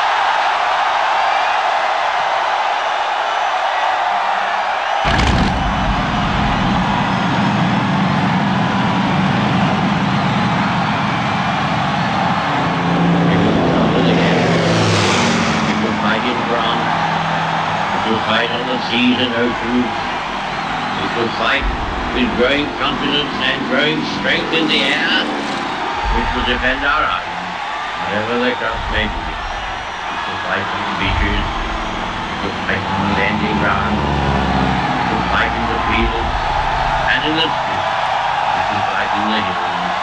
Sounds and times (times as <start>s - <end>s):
Male speech, man speaking: 13.2s - 14.4s, 15.7s - 16.9s, 17.9s - 20.0s, 21.0s - 25.4s, 26.0s - 27.3s, 28.0s - 29.4s, 30.2s - 31.6s, 32.3s - 34.2s, 35.1s - 36.3s, 37.1s - 37.9s, 38.6s - 40.0s.